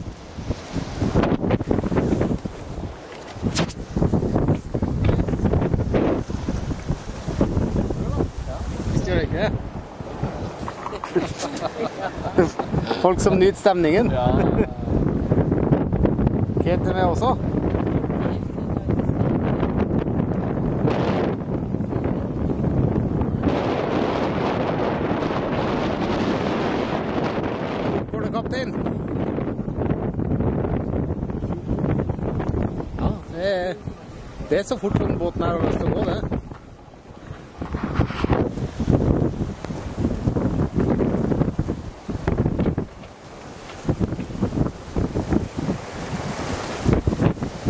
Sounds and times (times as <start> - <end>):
Boat, Water vehicle: 0.0 - 47.6.